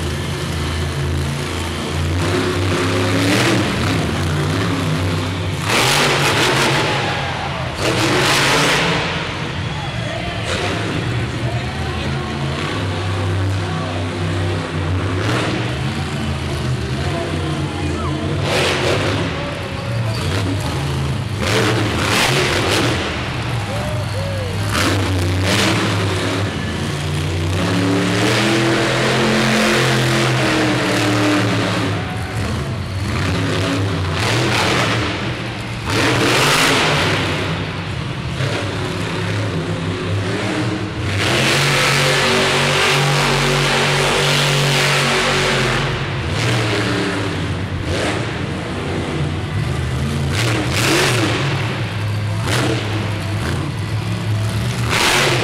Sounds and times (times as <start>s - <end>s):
Truck: 0.0s - 55.4s
Speech: 9.7s - 15.0s, 16.0s - 21.1s, 23.6s - 24.8s.